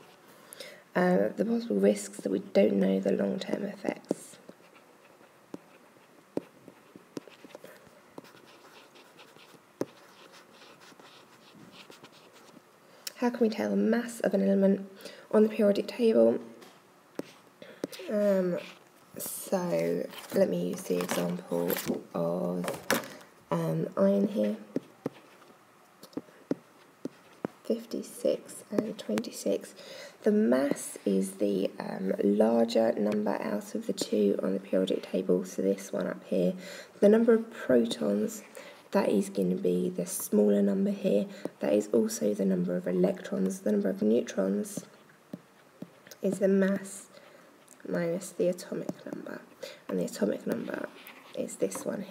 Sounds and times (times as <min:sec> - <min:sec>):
Speech: 0:00.9 - 0:04.4, 0:13.1 - 0:16.5, 0:18.0 - 0:22.9, 0:23.5 - 0:24.8, 0:27.7 - 0:44.9, 0:46.2 - 0:47.1, 0:47.8 - 0:52.1
Writing: 0:02.2 - 0:12.7, 0:16.6 - 0:18.9, 0:24.2 - 0:29.7, 0:42.9 - 0:52.1.